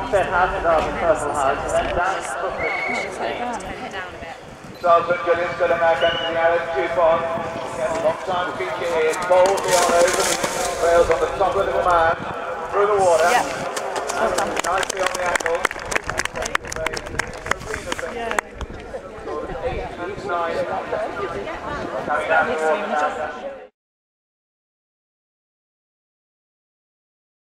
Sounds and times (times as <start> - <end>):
Speech: 0.0 - 23.7
Clip-clop: 13.1 - 19.0.